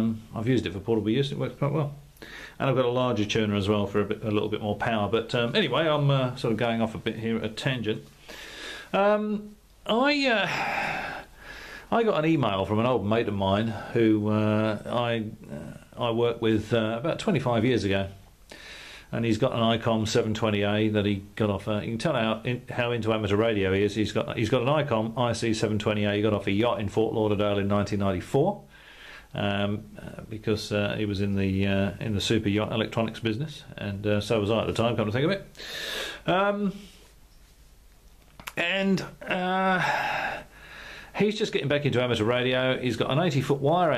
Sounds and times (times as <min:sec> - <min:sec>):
Speech: 0:00.0 - 0:02.0, 0:02.6 - 0:08.1, 0:08.9 - 0:10.7, 0:11.9 - 0:18.2, 0:19.1 - 0:28.7, 0:29.3 - 0:35.5, 0:36.2 - 0:36.8, 0:38.5 - 0:40.0, 0:41.2 - 0:43.9.